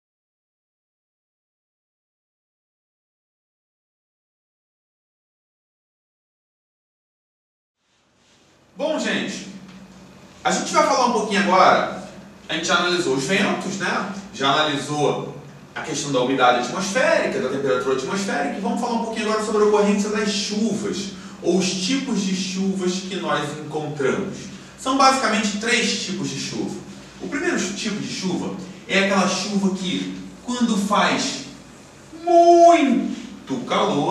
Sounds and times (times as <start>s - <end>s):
Speech: 8.8s - 9.7s, 10.4s - 34.1s.